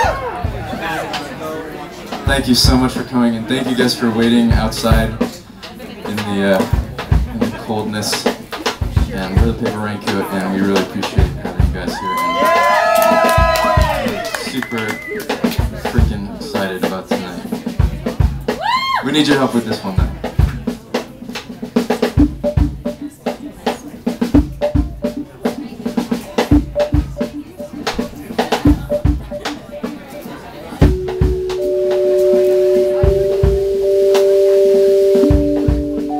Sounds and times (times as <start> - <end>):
Speech: 0.4 - 12.5, 14.1 - 18.4, 19.0 - 21.8, 22.8 - 24.2
Independent music: 19.8 - 36.1.